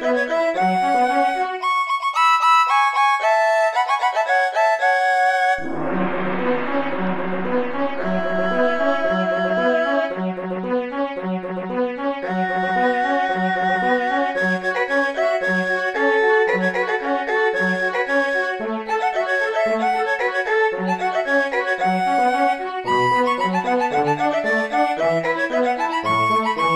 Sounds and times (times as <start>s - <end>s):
Video game music: 5.5s - 12.2s.